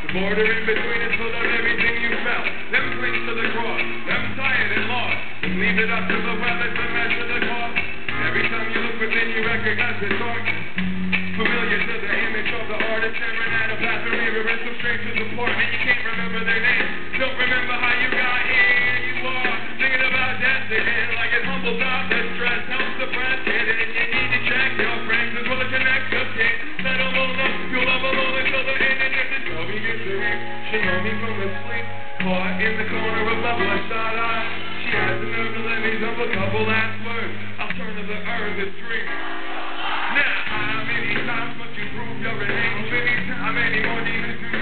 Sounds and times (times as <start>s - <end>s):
Music: 0.0s - 44.6s.